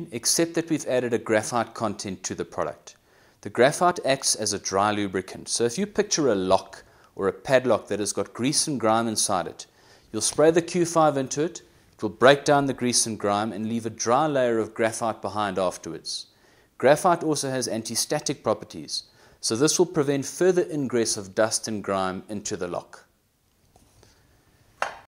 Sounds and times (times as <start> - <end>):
Speech: 0.0 - 23.1.